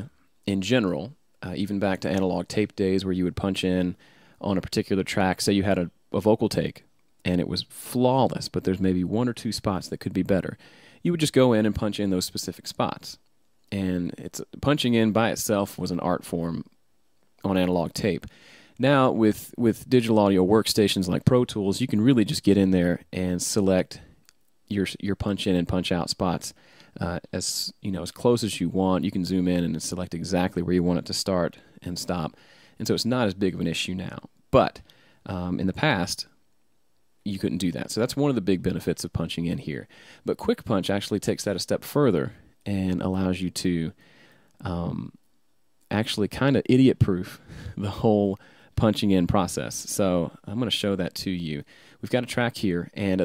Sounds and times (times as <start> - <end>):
Speech: 0.0 - 16.8, 17.4 - 24.1, 24.7 - 36.4, 37.2 - 44.0, 44.6 - 45.2, 45.8 - 53.2.